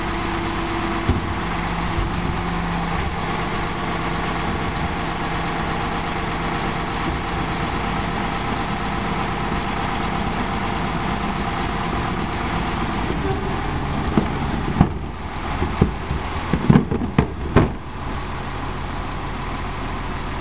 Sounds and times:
Truck: 0.0 - 20.4.

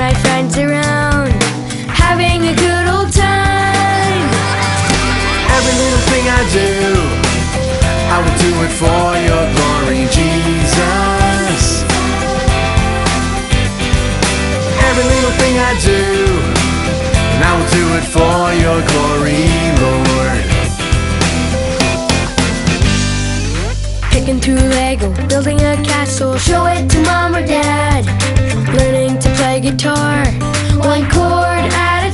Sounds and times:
Music: 0.0 - 32.1.

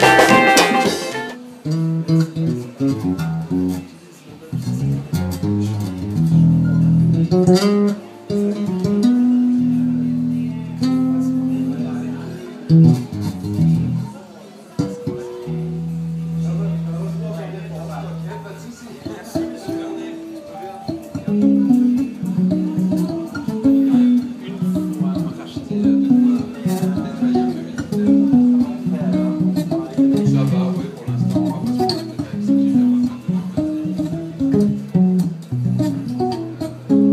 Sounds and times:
Music: 0.0 - 37.1
Speech: 2.3 - 37.1.

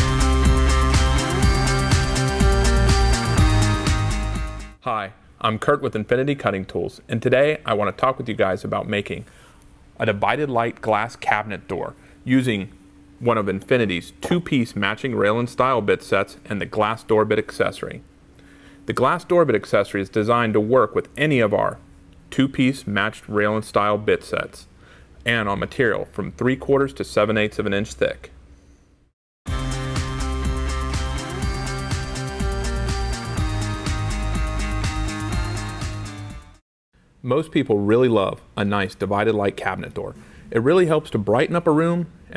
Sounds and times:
Music: 0.0 - 4.8, 29.5 - 36.6
Speech: 4.8 - 9.3, 10.0 - 18.1, 18.9 - 28.4, 37.2 - 42.3.

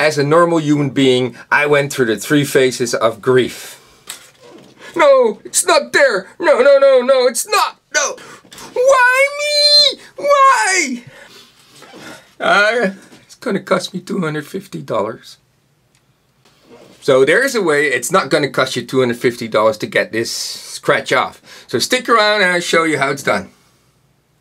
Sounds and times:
Speech: 0.0 - 3.8, 5.0 - 11.1, 12.4 - 15.4, 17.0 - 23.6.

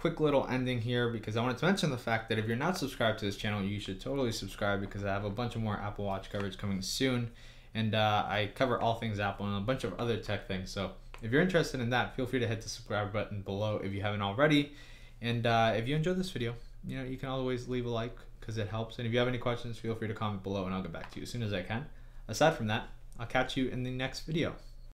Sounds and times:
Speech: 0.0 - 24.9.

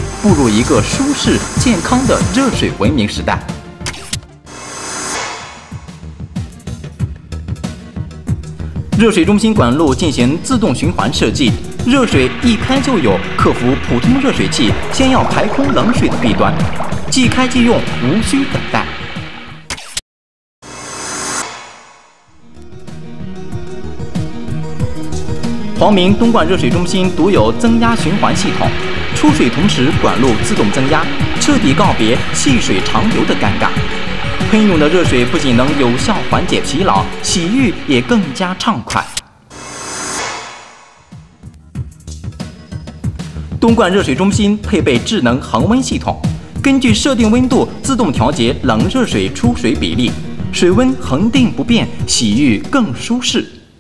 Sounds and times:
Music: 0.0 - 19.7, 20.6 - 53.8
Speech: 0.2 - 3.6, 9.0 - 18.9, 25.8 - 33.8, 34.4 - 39.2, 43.6 - 53.7.

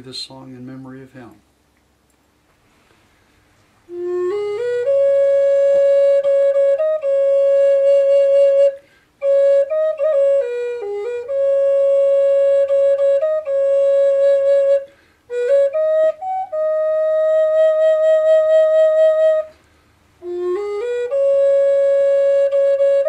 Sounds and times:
Flute: 3.9 - 23.0.

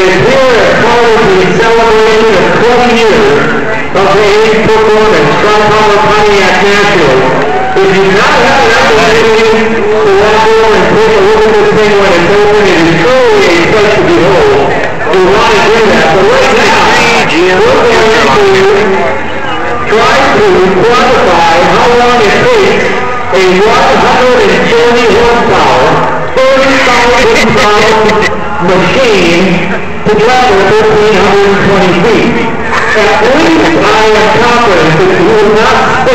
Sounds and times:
Speech: 0.0 - 36.1.

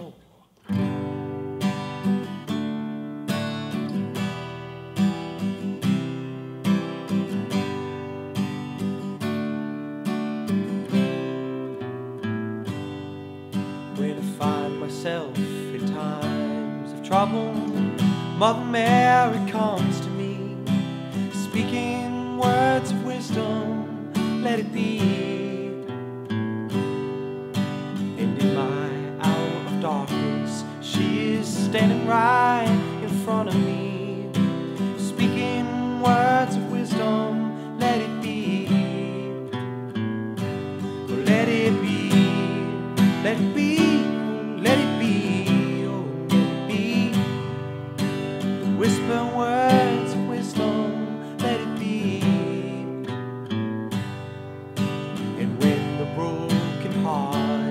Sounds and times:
Acoustic guitar: 0.0 - 57.7.

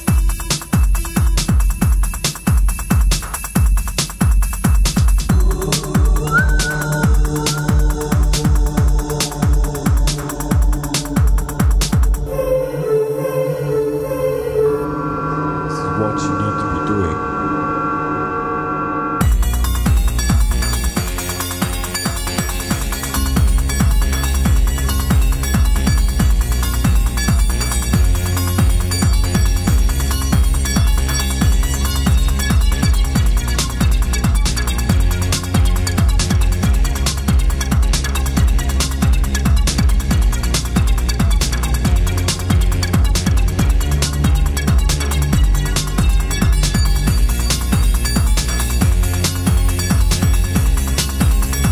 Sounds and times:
Music: 0.0 - 51.7.

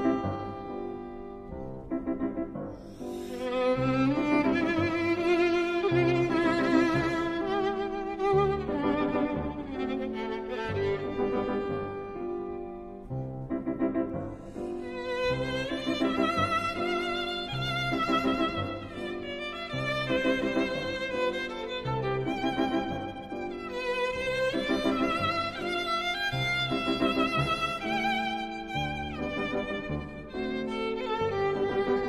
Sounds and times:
Violin, fiddle: 0.0 - 32.0.

